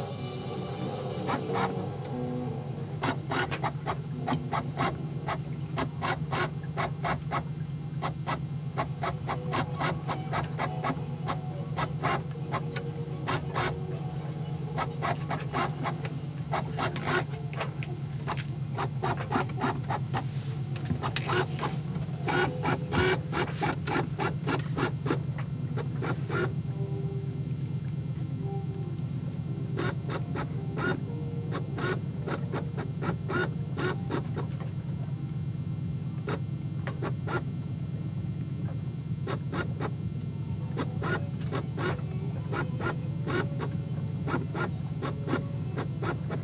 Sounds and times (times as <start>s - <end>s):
Boat, Water vehicle: 2.9s - 26.7s, 27.3s - 46.4s.